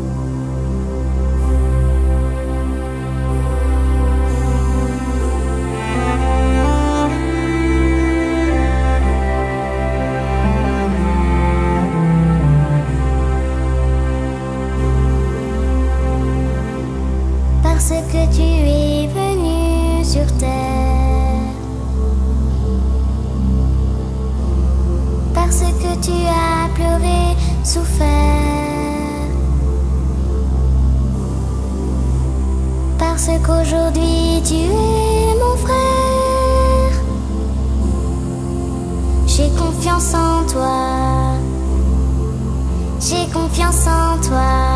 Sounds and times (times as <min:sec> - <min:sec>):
Music: 0:00.0 - 0:44.7.